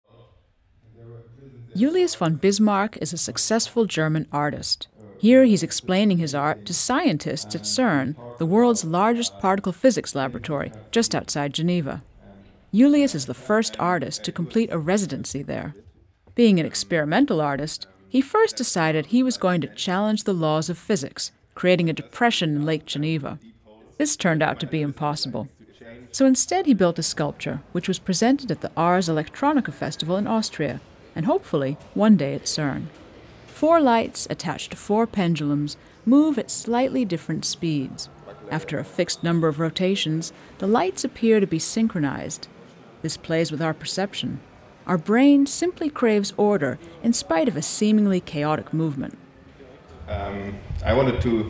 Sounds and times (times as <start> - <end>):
Speech: 0.1 - 32.9, 33.6 - 49.2, 49.9 - 51.4.